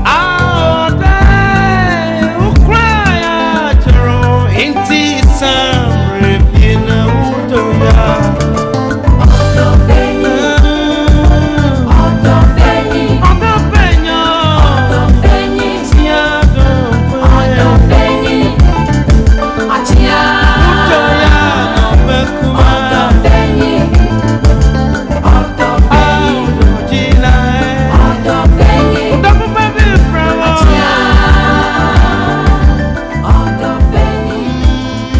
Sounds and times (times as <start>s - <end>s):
Music: 0.0s - 35.1s.